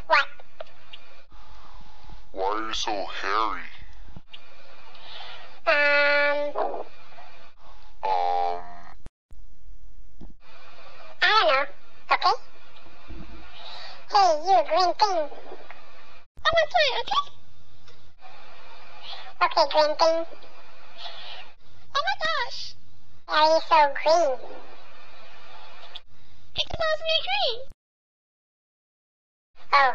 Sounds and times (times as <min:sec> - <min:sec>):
Speech: 0:02.4 - 0:03.9, 0:11.2 - 0:12.4, 0:14.1 - 0:15.4, 0:16.4 - 0:17.3, 0:19.4 - 0:20.4, 0:22.0 - 0:24.6, 0:26.6 - 0:27.7.